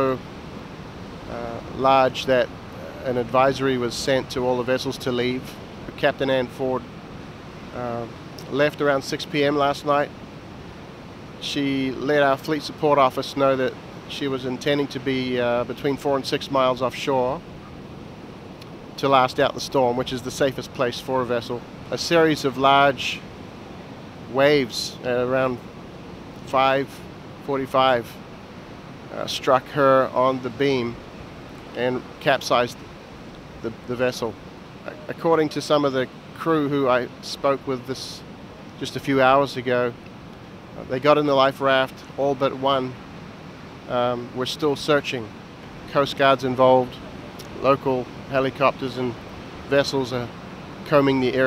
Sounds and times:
Waves, surf: 0.0s - 51.4s.

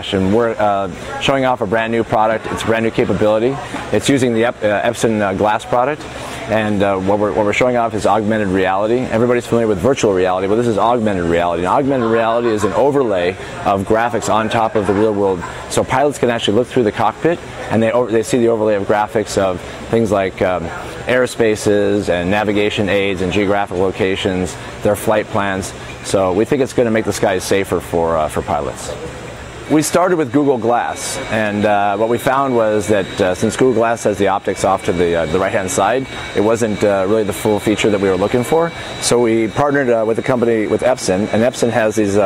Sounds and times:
Speech: 0.0s - 29.0s, 29.7s - 42.2s.

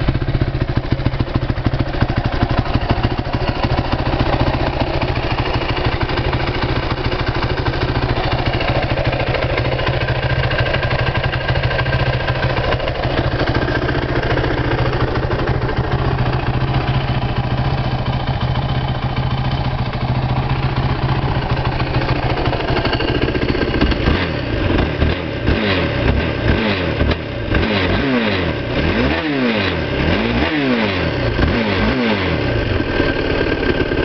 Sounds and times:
Vehicle: 0.0s - 34.0s
Accelerating, revving, vroom: 24.0s - 32.7s.

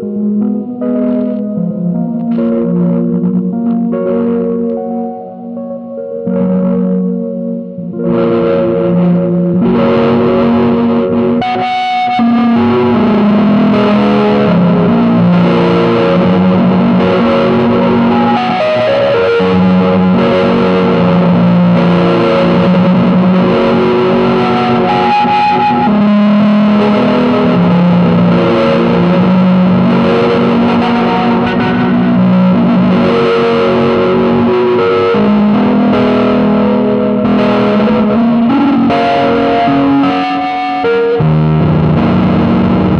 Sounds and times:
Distortion: 0.0s - 42.9s
Effects unit: 0.0s - 42.9s
Music: 0.0s - 42.9s.

